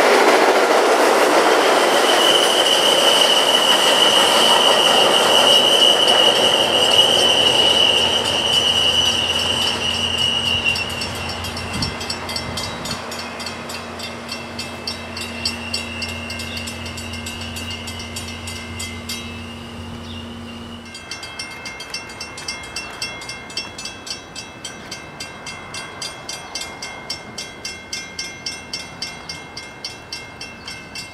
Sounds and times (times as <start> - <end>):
Railroad car, train wagon: 0.0 - 31.1
Train: 0.0 - 31.1.